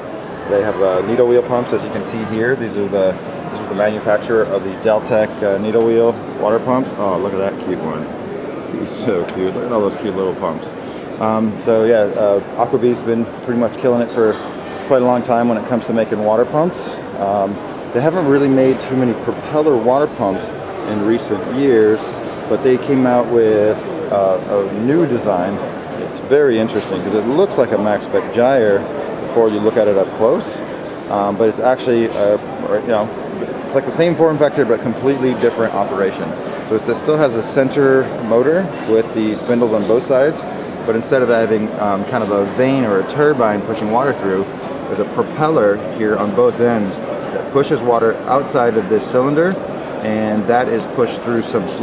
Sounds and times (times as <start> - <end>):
Speech: 0.4 - 8.1, 8.7 - 51.8.